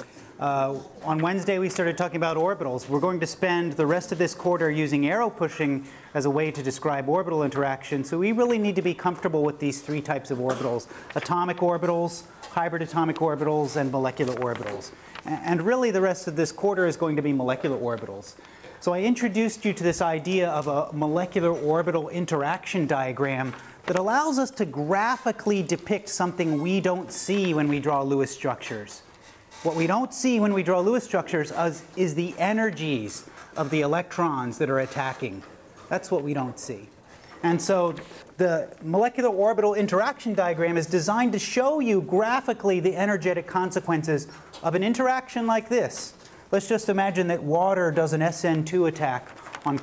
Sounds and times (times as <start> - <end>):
Speech: 0.4 - 49.8.